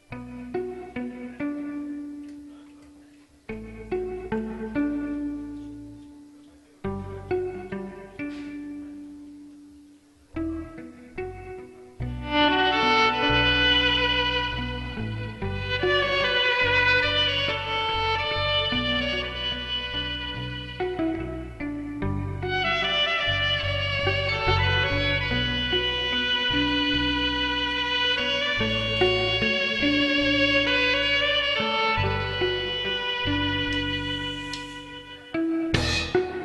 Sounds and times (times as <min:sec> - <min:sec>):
Pizzicato: 0:00.0 - 0:36.4.